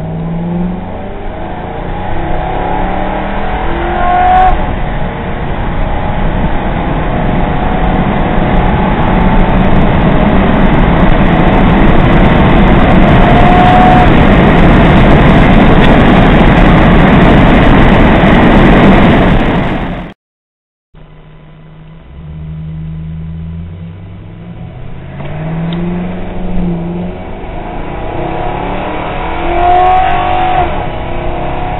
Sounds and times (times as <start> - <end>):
Car: 0.0 - 20.2, 21.0 - 31.7.